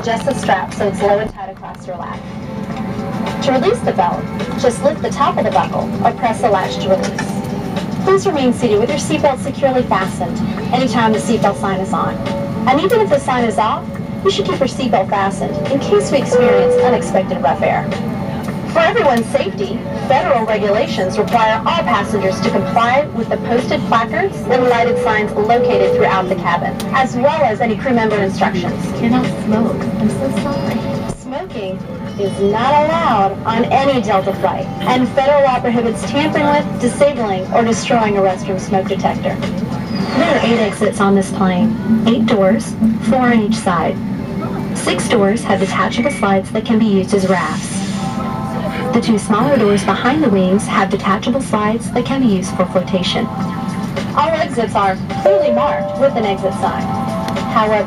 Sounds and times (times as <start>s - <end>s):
Speech: 0.0s - 2.2s, 3.4s - 7.4s, 8.1s - 18.0s, 18.7s - 53.4s, 54.1s - 57.8s
Music: 0.0s - 57.8s.